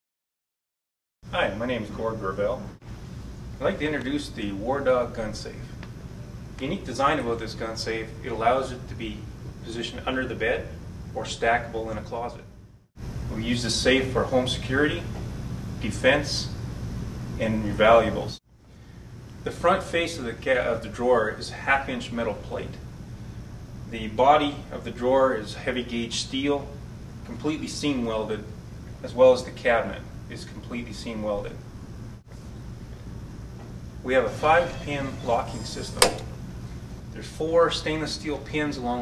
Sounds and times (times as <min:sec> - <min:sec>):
Speech: 0:01.3 - 0:02.8, 0:03.6 - 0:05.8, 0:06.6 - 0:12.5, 0:13.3 - 0:15.2, 0:15.8 - 0:16.6, 0:17.4 - 0:18.4, 0:19.4 - 0:22.8, 0:23.9 - 0:31.6, 0:34.0 - 0:36.3, 0:37.2 - 0:39.0.